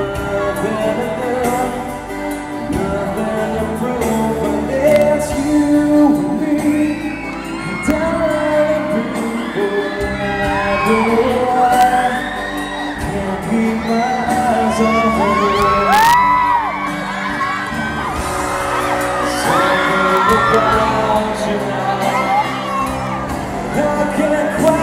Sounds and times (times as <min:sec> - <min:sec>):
Male singing: 0:00.0 - 0:16.8, 0:19.1 - 0:22.7, 0:23.6 - 0:24.8
Music: 0:00.0 - 0:24.8.